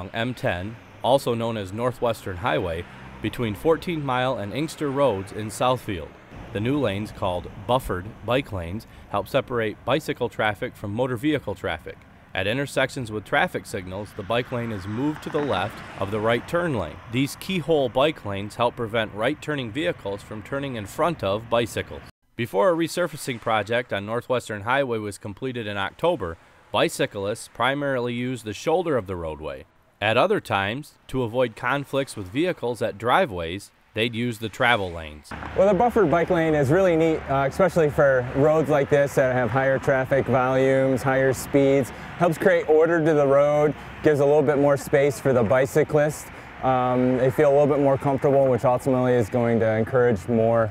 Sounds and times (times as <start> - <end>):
Vehicle: 0.0 - 22.1, 23.0 - 50.7
Speech: 0.0 - 50.7.